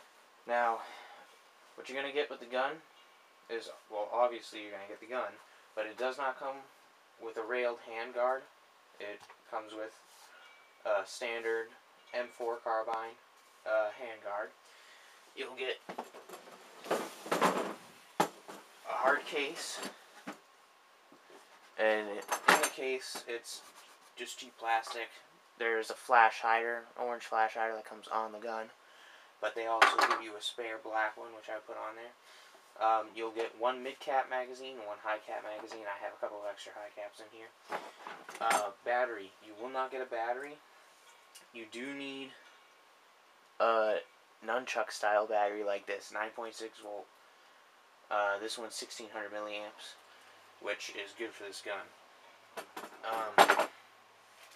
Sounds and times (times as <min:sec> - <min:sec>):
Speech: 0:00.5 - 0:01.0, 0:01.8 - 0:02.8, 0:03.5 - 0:10.0, 0:10.8 - 0:14.6, 0:15.4 - 0:15.8, 0:18.8 - 0:20.0, 0:21.8 - 0:28.8, 0:29.4 - 0:32.2, 0:32.8 - 0:37.6, 0:38.4 - 0:40.6, 0:41.5 - 0:42.4, 0:43.6 - 0:47.1, 0:48.1 - 0:50.0, 0:50.6 - 0:51.9, 0:53.0 - 0:53.6.